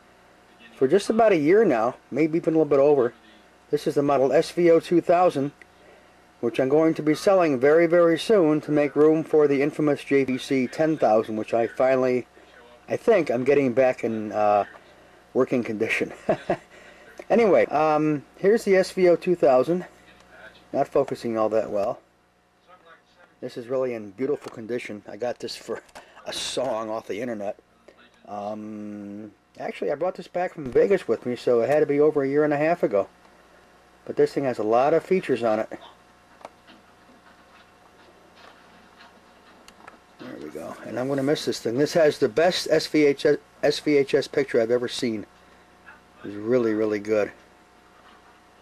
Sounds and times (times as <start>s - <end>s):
Speech: 0.5s - 5.6s, 6.4s - 22.0s, 22.6s - 33.1s, 34.0s - 36.0s, 40.2s - 47.4s.